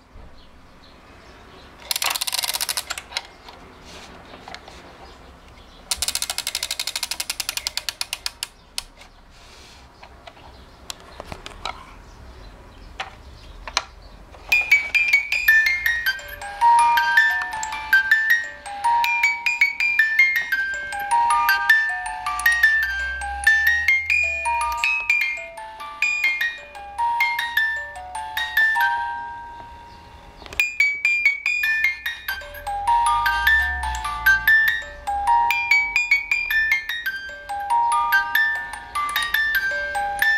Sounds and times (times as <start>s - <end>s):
Glockenspiel: 14.5s - 40.3s
Marimba, xylophone: 14.5s - 40.3s.